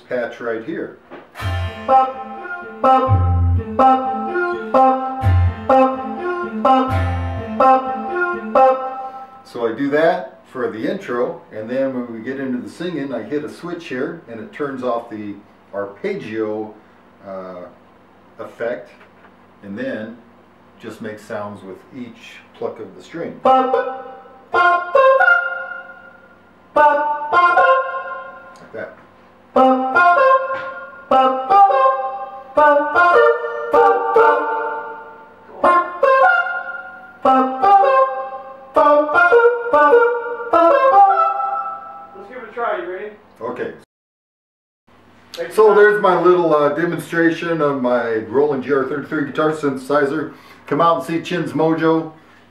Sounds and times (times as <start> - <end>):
Speech: 0.0 - 1.0, 9.5 - 17.8, 18.4 - 19.0, 19.6 - 23.4, 28.6 - 29.0, 42.2 - 43.9, 45.4 - 52.2
Inside, small room: 0.0 - 43.9
Electric guitar: 1.3 - 9.4, 23.4 - 26.2, 26.8 - 28.8, 29.6 - 42.2.